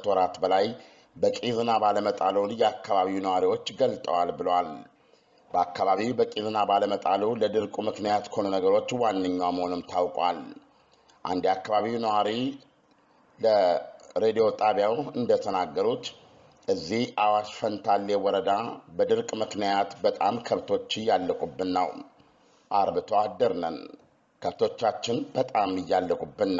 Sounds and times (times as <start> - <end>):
Speech: 0.0 - 4.9, 5.5 - 12.6, 13.4 - 22.1, 22.7 - 26.5.